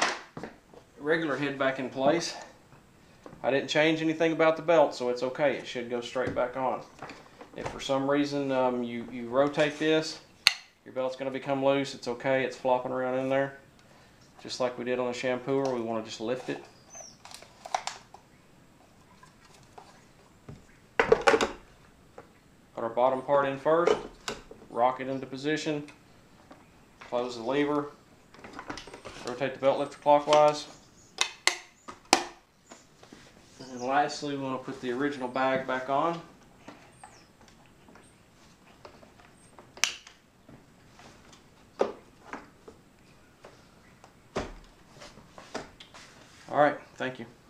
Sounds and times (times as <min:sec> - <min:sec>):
Speech: 0:01.0 - 0:02.6, 0:03.4 - 0:06.9, 0:07.6 - 0:13.6, 0:14.4 - 0:16.7, 0:22.8 - 0:24.1, 0:24.7 - 0:25.9, 0:27.1 - 0:28.0, 0:29.2 - 0:30.7, 0:33.6 - 0:36.3, 0:46.5 - 0:47.4.